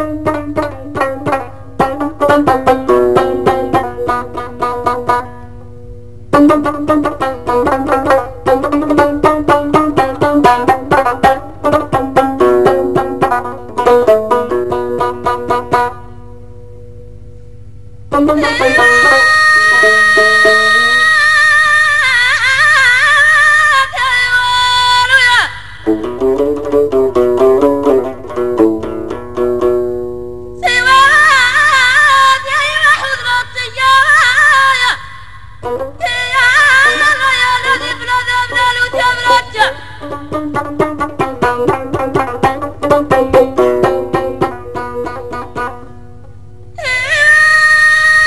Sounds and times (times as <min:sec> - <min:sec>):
Music: 0:00.0 - 0:21.2, 0:25.8 - 0:33.0, 0:35.6 - 0:38.0, 0:38.8 - 0:46.8.